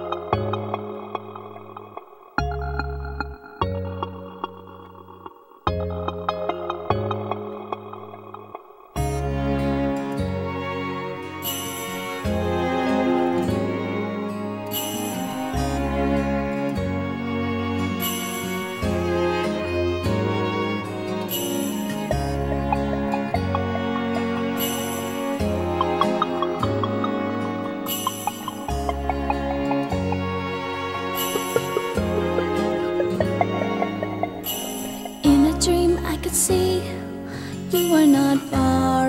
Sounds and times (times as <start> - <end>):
Theme music: 18.8 - 36.4.